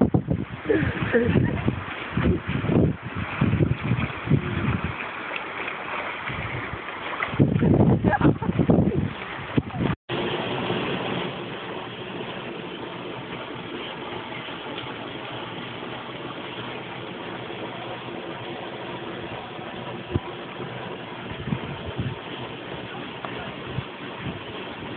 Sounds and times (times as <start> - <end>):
Waterfall: 0.0 - 24.9.